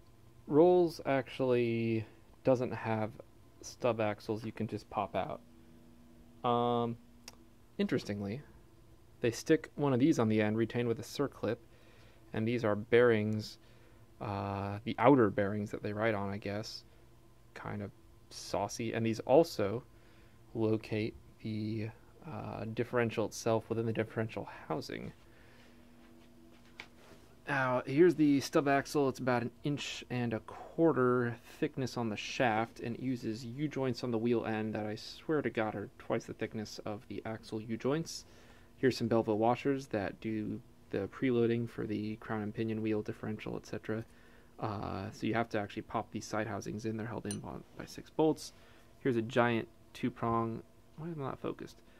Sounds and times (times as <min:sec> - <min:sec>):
Speech: 0:00.5 - 0:05.4, 0:06.4 - 0:07.0, 0:07.8 - 0:08.6, 0:09.2 - 0:11.6, 0:12.3 - 0:13.6, 0:14.2 - 0:16.9, 0:17.5 - 0:19.9, 0:20.5 - 0:25.2, 0:27.4 - 0:51.8.